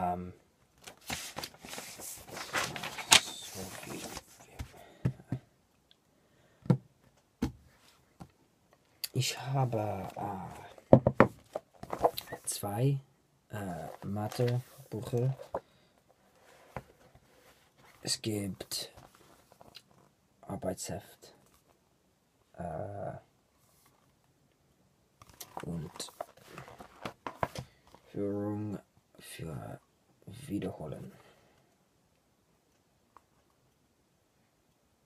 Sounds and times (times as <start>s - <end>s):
Male speech, man speaking: 0.0s - 0.4s, 9.1s - 10.8s, 12.3s - 15.4s, 18.0s - 19.0s, 20.4s - 21.4s, 22.6s - 23.3s, 25.6s - 26.2s, 28.1s - 31.2s.